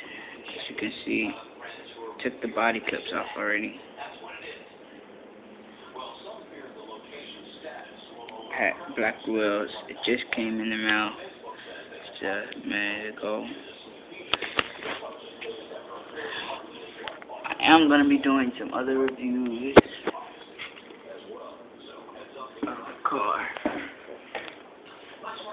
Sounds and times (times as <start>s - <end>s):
Speech: 0.5s - 4.7s, 5.8s - 23.8s.